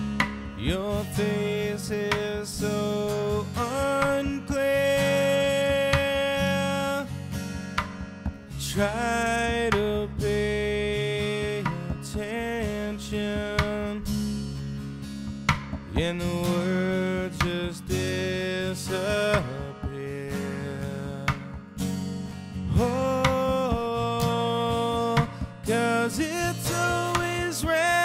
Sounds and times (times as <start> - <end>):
Acoustic guitar: 0.0 - 28.0.